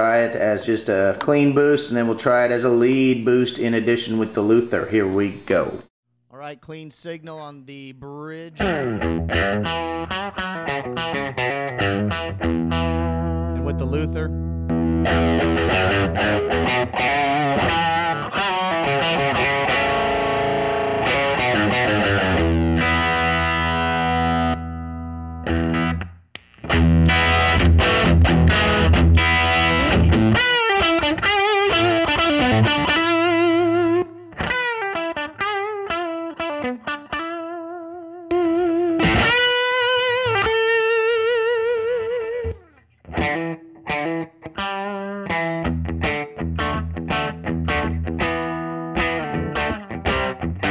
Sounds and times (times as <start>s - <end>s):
Distortion: 0.0s - 50.7s
Guitar: 6.4s - 50.7s
Effects unit: 8.6s - 50.7s
Electronic tuner: 8.6s - 50.7s.